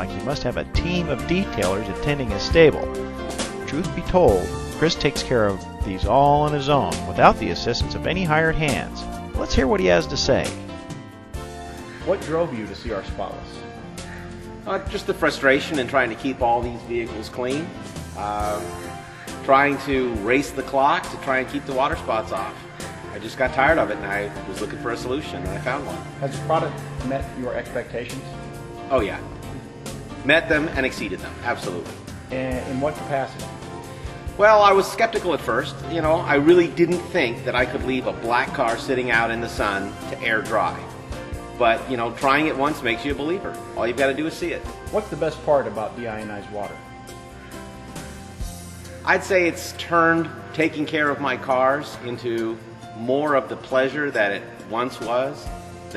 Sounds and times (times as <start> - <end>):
Speech: 0.0 - 2.9, 3.7 - 10.6, 12.1 - 13.6, 14.7 - 18.7, 19.5 - 28.2, 28.9 - 29.3, 30.3 - 33.4, 34.4 - 40.9, 41.6 - 46.8, 49.1 - 55.9
Music: 0.0 - 55.9.